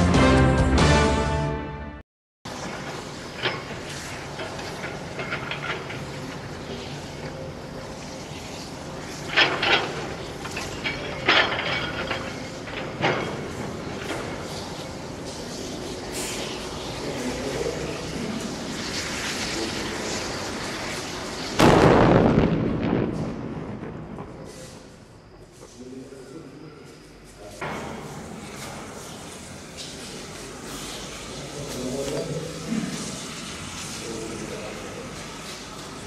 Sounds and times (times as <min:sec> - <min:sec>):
Fire: 0:02.5 - 0:26.2, 0:27.0 - 0:36.0.